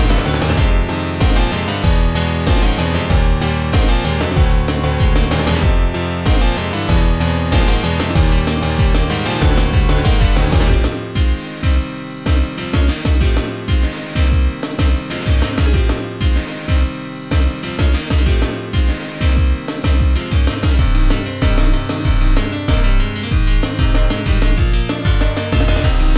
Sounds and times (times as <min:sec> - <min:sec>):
Electronic music: 0:00.0 - 0:26.1.